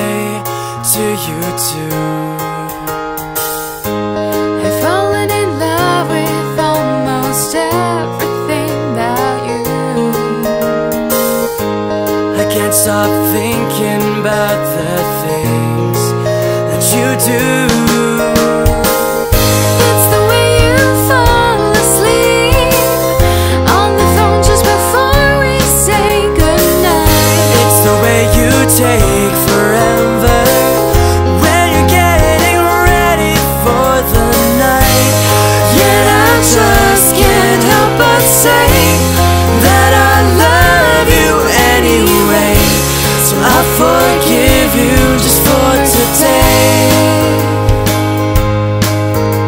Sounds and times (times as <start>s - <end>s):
Music: 0.0s - 49.4s.